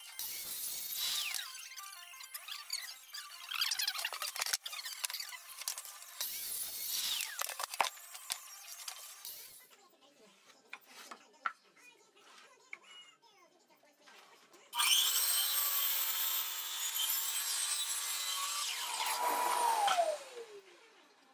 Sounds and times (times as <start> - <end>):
Speech: 9.6 - 14.8.